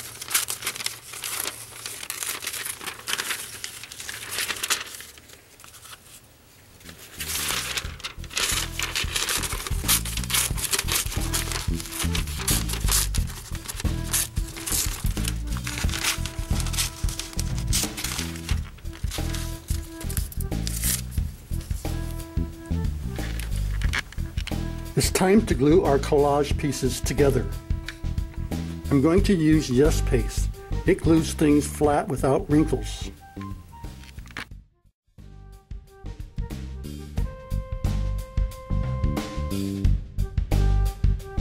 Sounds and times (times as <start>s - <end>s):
Music: 6.8s - 41.4s.